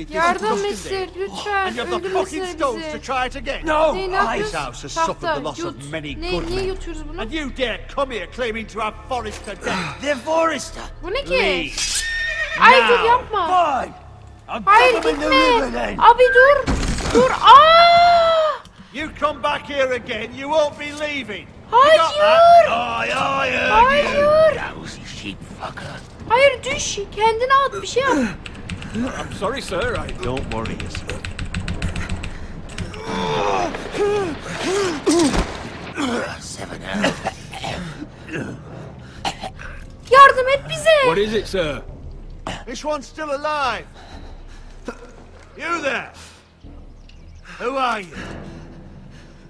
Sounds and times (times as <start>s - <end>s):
Music: 0.0s - 49.4s.